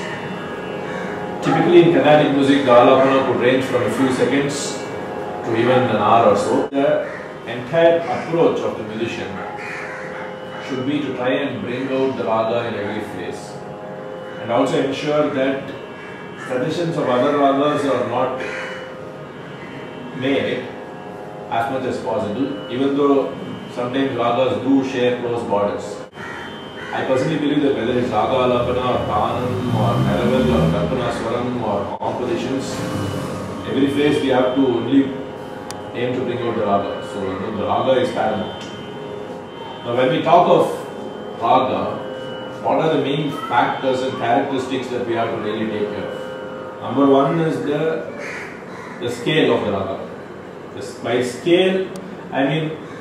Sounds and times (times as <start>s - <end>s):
Speech: 1.4s - 9.5s, 10.6s - 13.6s, 14.4s - 15.8s, 16.5s - 18.4s, 20.2s - 20.7s, 21.5s - 26.1s, 26.9s - 35.2s, 35.9s - 38.7s, 39.8s - 46.2s, 46.8s - 48.1s, 49.0s - 50.1s, 50.8s - 52.8s.